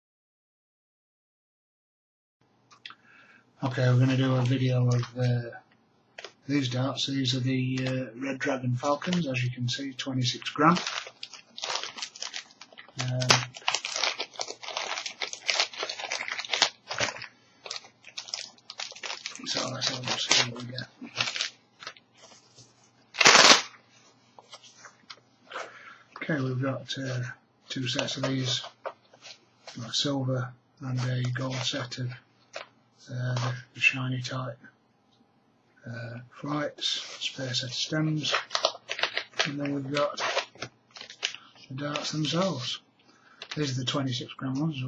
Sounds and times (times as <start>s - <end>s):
Speech: 3.6s - 5.7s, 6.4s - 10.9s, 13.0s - 13.6s, 19.4s - 21.0s, 26.2s - 28.8s, 29.7s - 32.2s, 33.0s - 34.7s, 35.8s - 38.5s, 39.4s - 40.4s, 41.7s - 42.8s, 43.6s - 44.8s
Crumpling, crinkling: 8.8s - 9.4s, 10.0s - 23.8s, 38.2s - 42.7s, 43.3s - 44.0s.